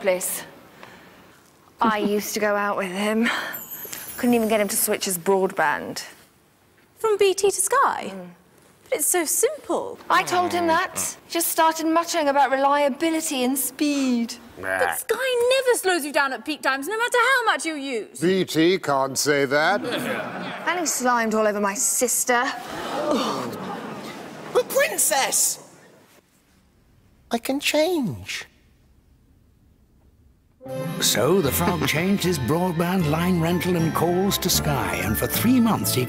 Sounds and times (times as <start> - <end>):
Music: 30.6 - 36.0.